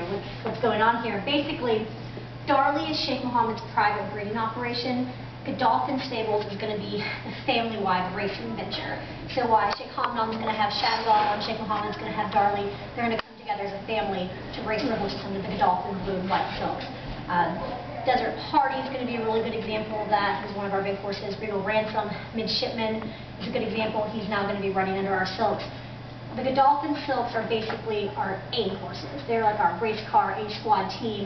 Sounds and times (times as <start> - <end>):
Speech: 0.0 - 1.9, 2.5 - 25.7, 26.4 - 31.2.